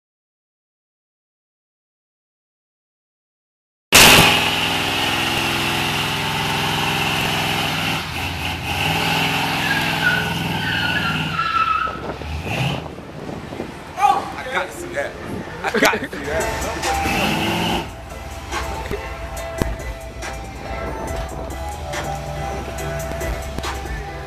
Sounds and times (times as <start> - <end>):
Car: 4.0 - 24.2.